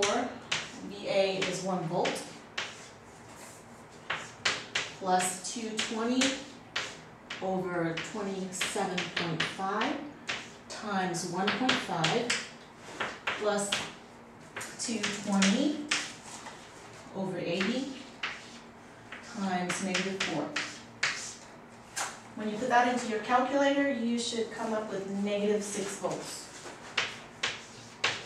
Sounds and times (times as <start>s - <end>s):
Speech: 0.0s - 2.3s, 7.4s - 10.1s, 10.7s - 12.4s, 13.4s - 13.9s, 14.8s - 15.9s, 17.1s - 18.0s, 19.3s - 20.6s, 22.4s - 26.6s
Inside, small room: 0.0s - 28.2s.